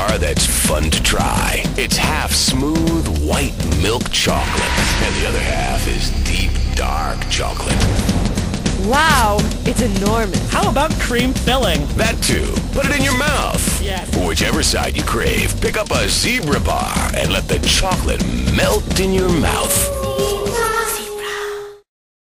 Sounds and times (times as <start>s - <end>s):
Speech: 0.0s - 7.8s, 8.8s - 21.6s
Music: 0.0s - 21.9s.